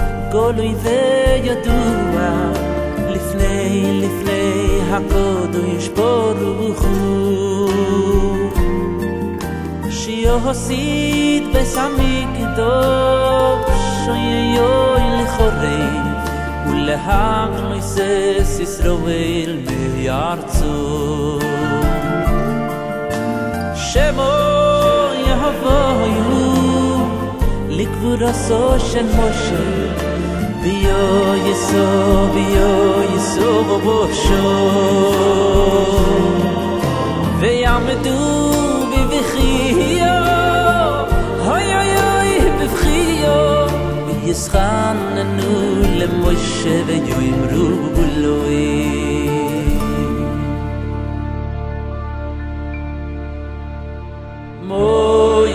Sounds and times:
Christmas music: 0:00.0 - 0:55.5.

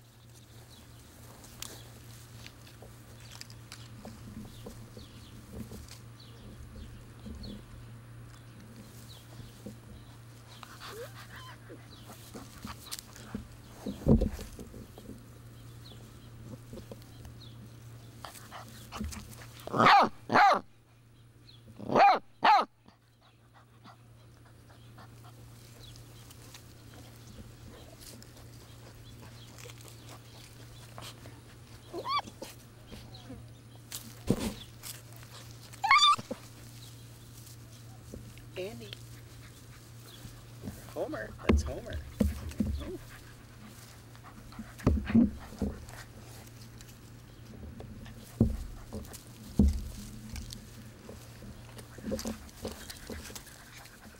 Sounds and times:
Outside, rural or natural: 0:00.0 - 0:54.1
Dog: 0:10.6 - 0:12.9, 0:42.2 - 0:46.5.

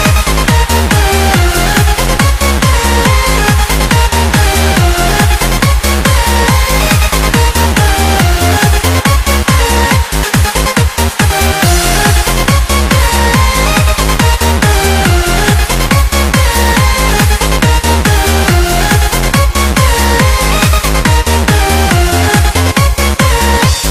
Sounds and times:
Techno: 0:00.0 - 0:23.9.

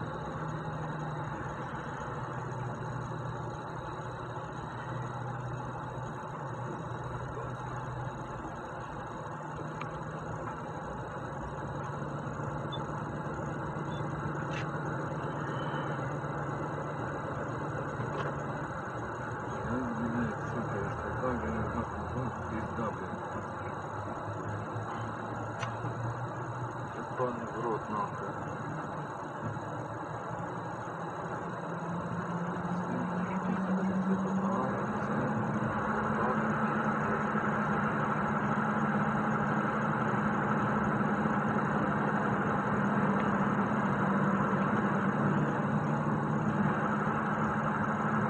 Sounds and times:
Vehicle: 0:00.0 - 0:48.2
Speech: 0:19.6 - 0:23.8, 0:27.0 - 0:28.8, 0:32.8 - 0:37.3.

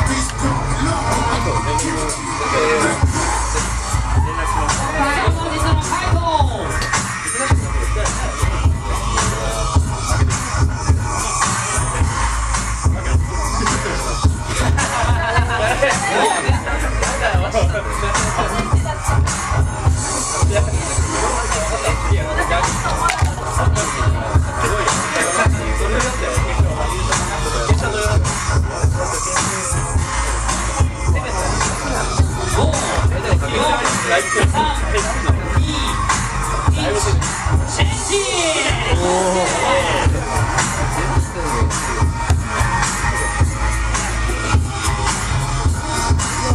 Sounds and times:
Music: 0:00.0 - 0:46.5
Speech: 0:15.7 - 0:19.2, 0:20.1 - 0:42.0.

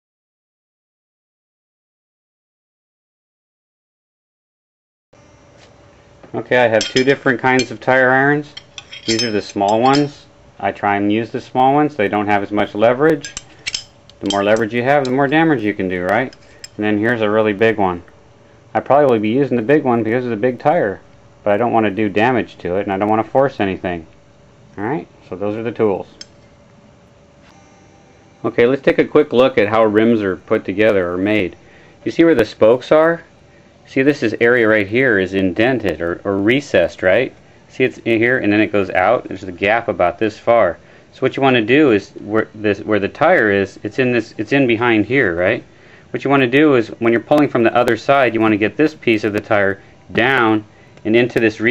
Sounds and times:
Speech: 0:06.3 - 0:13.4, 0:14.2 - 0:18.1, 0:18.7 - 0:24.1, 0:24.8 - 0:26.2, 0:28.4 - 0:33.3, 0:33.9 - 0:51.7
Tools: 0:06.8 - 0:07.9, 0:08.5 - 0:10.2, 0:13.2 - 0:15.3, 0:16.3 - 0:16.8.

